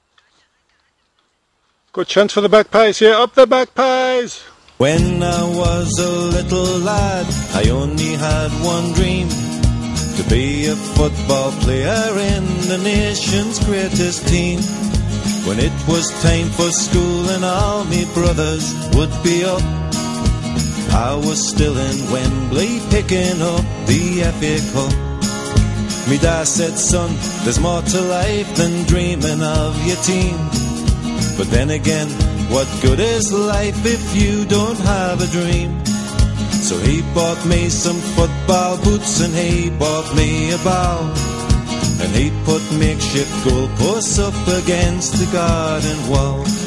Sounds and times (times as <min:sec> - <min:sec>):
Singing: 0:04.8 - 0:09.4, 0:42.0 - 0:46.6
Jingle (music): 0:04.9 - 0:46.6.